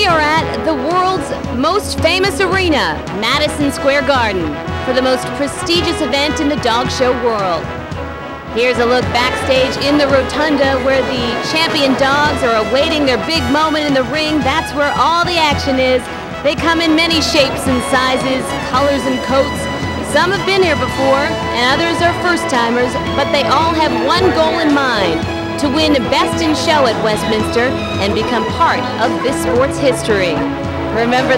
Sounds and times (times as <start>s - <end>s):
Speech: 0.0s - 7.6s, 8.6s - 30.4s, 31.0s - 31.3s
Music: 0.0s - 31.3s.